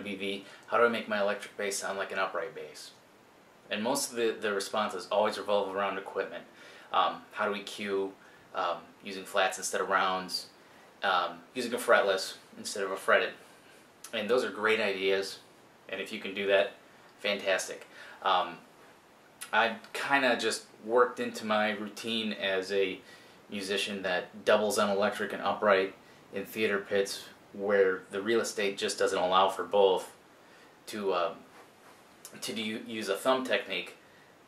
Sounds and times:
Speech: 0:00.0 - 0:03.0, 0:03.7 - 0:13.4, 0:14.1 - 0:18.7, 0:19.4 - 0:30.2, 0:30.9 - 0:31.5, 0:32.3 - 0:34.0.

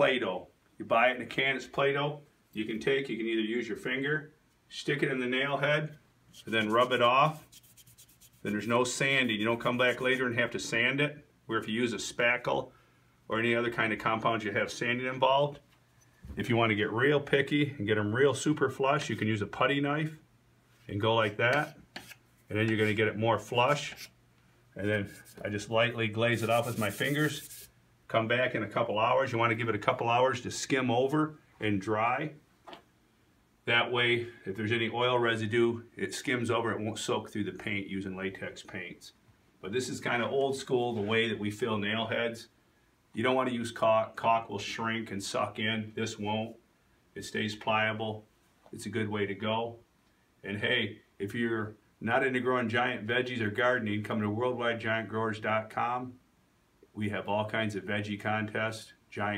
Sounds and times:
Speech: 0:00.0 - 0:07.5, 0:08.4 - 0:12.7, 0:13.3 - 0:15.7, 0:16.3 - 0:20.2, 0:20.9 - 0:21.8, 0:22.5 - 0:24.1, 0:24.8 - 0:32.4, 0:33.6 - 0:42.5, 0:43.2 - 0:46.6, 0:47.2 - 0:49.8, 0:50.4 - 0:56.2, 0:56.9 - 0:59.3.

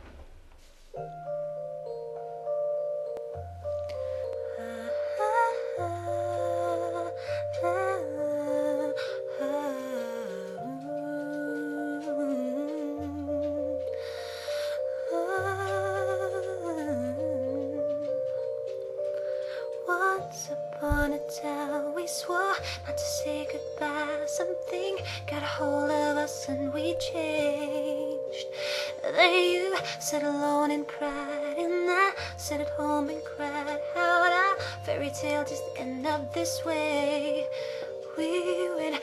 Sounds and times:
Music: 0:00.0 - 0:39.0
Female singing: 0:04.6 - 0:13.6, 0:15.1 - 0:17.8, 0:19.8 - 0:39.0.

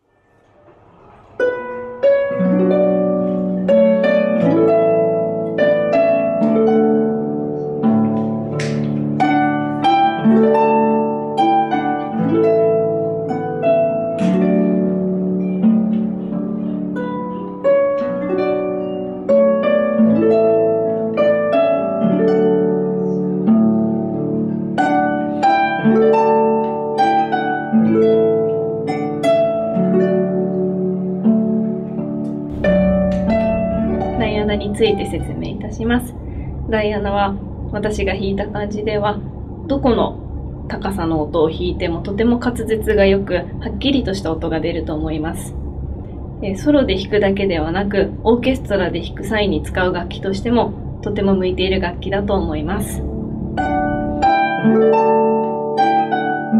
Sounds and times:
Harp: 0:00.0 - 0:36.7, 0:52.8 - 0:56.6
Pizzicato: 0:00.0 - 0:56.6.

